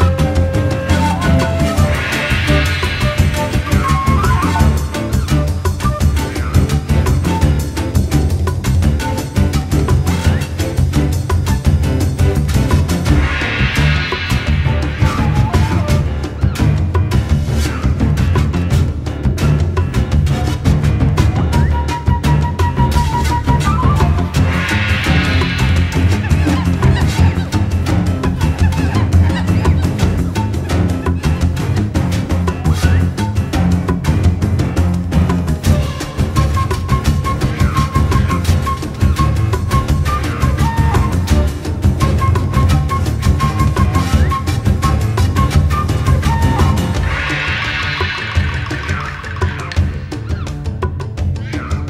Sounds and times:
Funny music: 0.0 - 51.9.

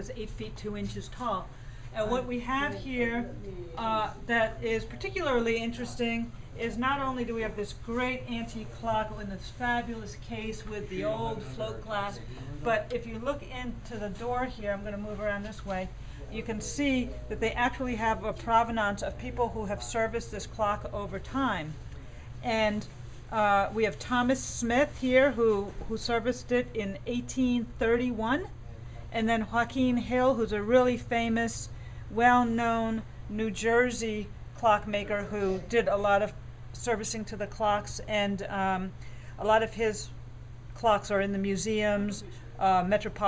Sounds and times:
Speech: 0.0 - 40.2, 40.8 - 43.2.

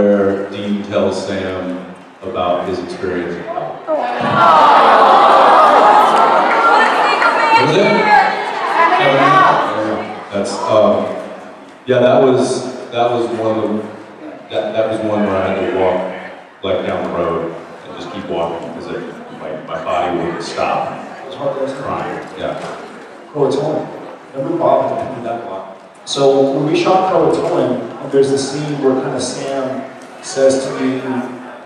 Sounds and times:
Speech: 0.0 - 4.4, 6.6 - 11.2, 11.9 - 31.6.

